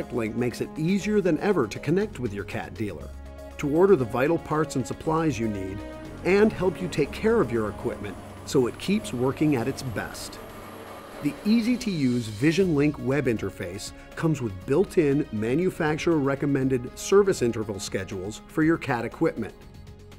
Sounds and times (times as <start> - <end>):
Speech: 0.0 - 10.4, 11.2 - 19.6
Music: 0.0 - 20.1.